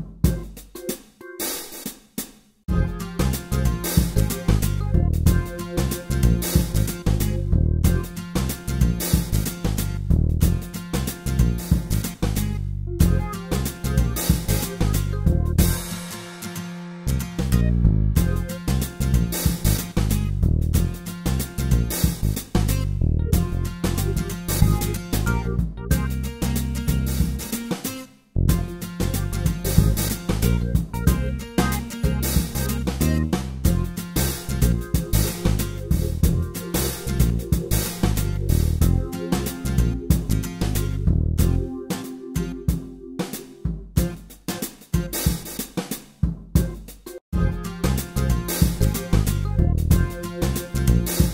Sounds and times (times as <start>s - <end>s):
Bass drum: 0.0s - 0.7s, 2.7s - 16.0s, 17.1s - 27.5s, 28.4s - 44.4s, 46.2s - 51.3s
Hi-hat: 0.0s - 42.5s, 43.2s - 51.3s
Drum kit: 0.0s - 51.3s
Rimshot: 18.2s - 22.9s, 26.4s - 46.9s, 47.8s - 51.3s.